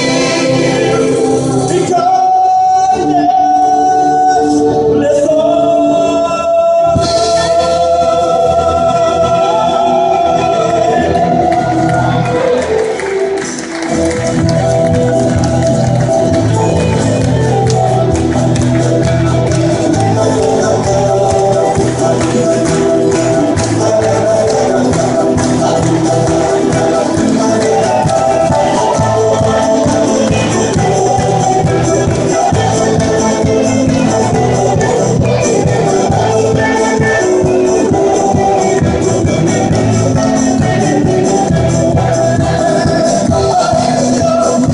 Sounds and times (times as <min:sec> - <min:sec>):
Choir: 0:00.0 - 0:13.2, 0:19.6 - 0:44.7
Music of Latin America: 0:00.0 - 0:44.7.